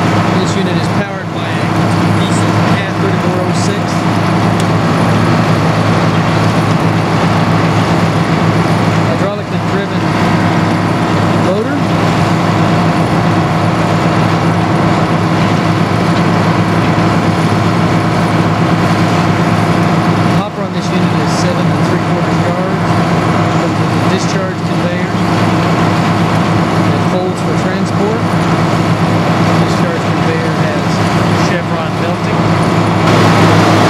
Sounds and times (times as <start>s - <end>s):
Speech: 0.3s - 4.1s, 9.1s - 10.2s, 11.4s - 11.9s, 20.4s - 22.8s, 23.6s - 25.2s, 26.9s - 28.3s, 29.6s - 32.4s.